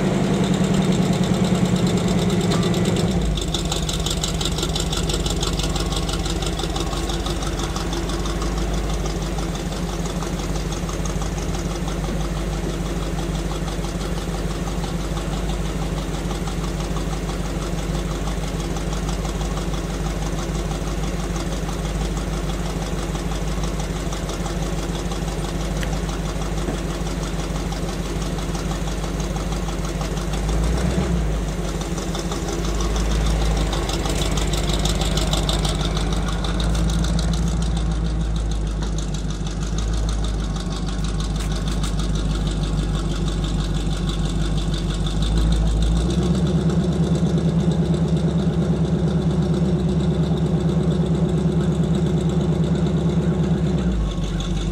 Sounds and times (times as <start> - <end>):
Car: 0.0 - 54.7.